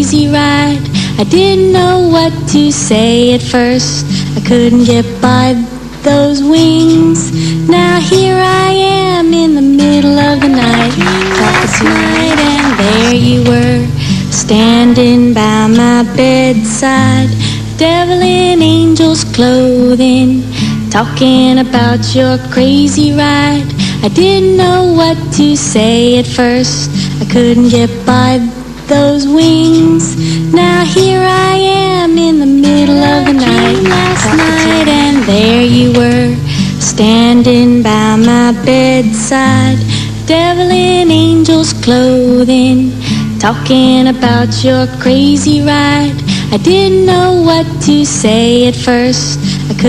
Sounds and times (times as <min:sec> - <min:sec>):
Music: 0:00.0 - 0:49.8.